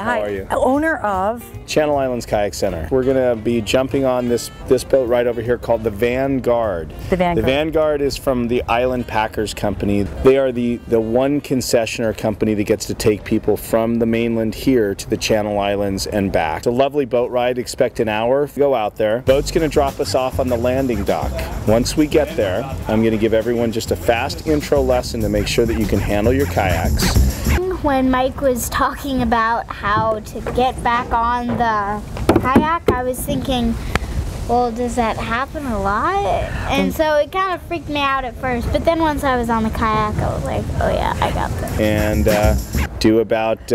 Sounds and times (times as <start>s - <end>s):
Music: 0.0s - 14.0s, 19.2s - 27.8s, 41.0s - 42.9s.